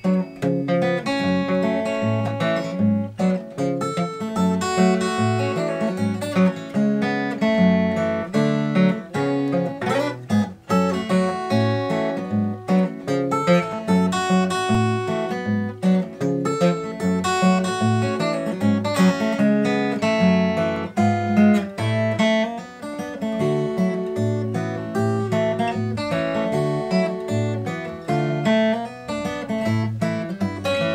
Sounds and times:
Acoustic guitar: 0.0s - 30.9s
Strum: 0.0s - 30.9s.

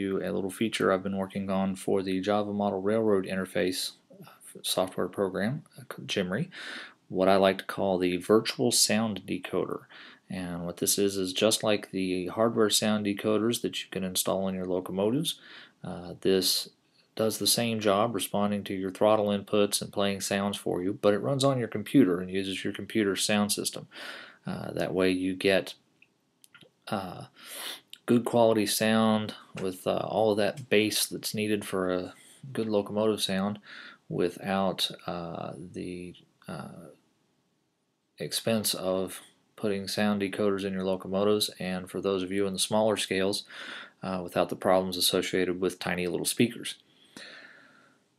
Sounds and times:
Speech: 0.0s - 25.8s, 26.9s - 37.0s, 38.2s - 46.8s.

